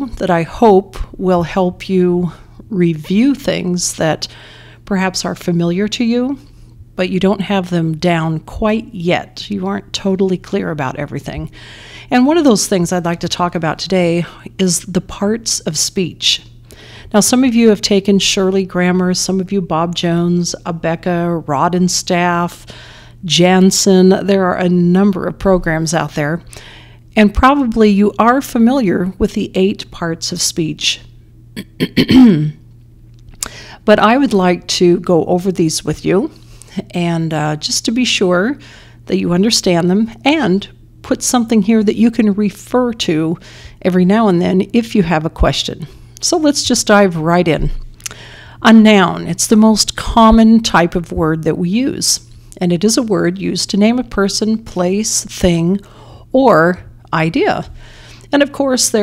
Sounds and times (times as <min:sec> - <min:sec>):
Female speech, woman speaking: 0:00.0 - 0:04.3, 0:04.9 - 0:11.5, 0:12.1 - 0:16.5, 0:17.1 - 0:22.6, 0:23.3 - 0:26.5, 0:27.2 - 0:31.1, 0:33.9 - 0:47.8, 0:48.6 - 0:55.8, 0:56.4 - 0:57.7, 0:58.3 - 0:59.0
Narration, monologue: 0:00.0 - 0:59.0.